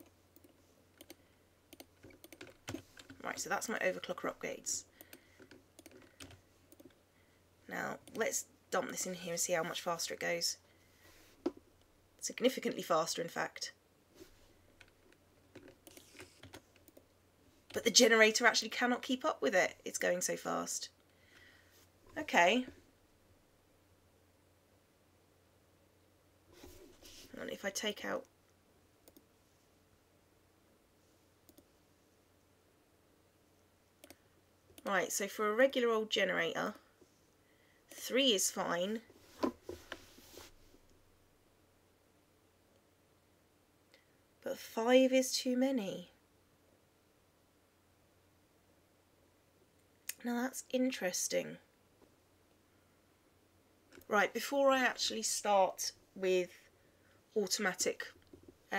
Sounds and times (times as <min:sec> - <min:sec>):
Inside, small room: 0:00.0 - 0:58.7
Clicking: 0:00.4 - 0:02.4, 0:05.0 - 0:07.0, 0:29.1 - 0:29.3, 0:31.5 - 0:31.7
Speech: 0:03.2 - 0:04.9, 0:07.7 - 0:10.6, 0:12.2 - 0:13.8, 0:17.7 - 0:20.9, 0:22.2 - 0:22.8, 0:27.3 - 0:28.3, 0:34.8 - 0:36.8, 0:38.0 - 0:39.1, 0:44.4 - 0:46.2, 0:50.1 - 0:51.7, 0:54.0 - 0:56.6, 0:57.4 - 0:58.7.